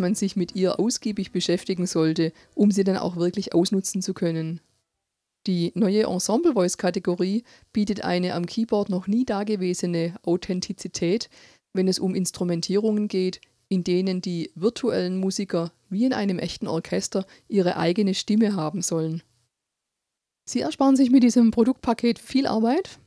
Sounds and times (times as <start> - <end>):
Speech: 0.0 - 4.6, 5.5 - 19.3, 20.5 - 23.0.